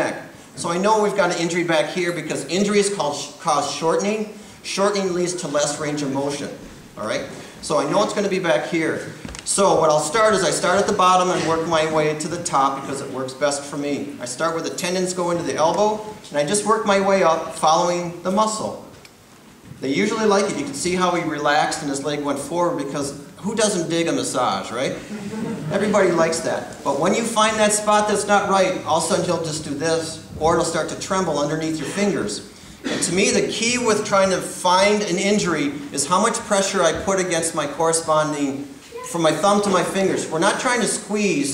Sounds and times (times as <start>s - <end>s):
Speech: 0.0s - 18.9s, 19.8s - 25.0s, 25.7s - 41.5s.